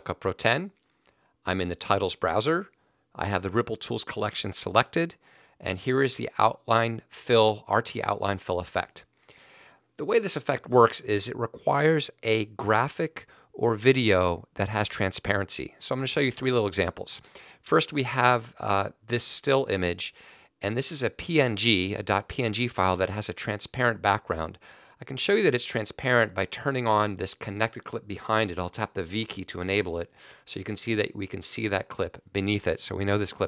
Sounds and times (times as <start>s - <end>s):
Speech: 0.0s - 0.8s, 1.4s - 9.1s, 10.0s - 33.4s.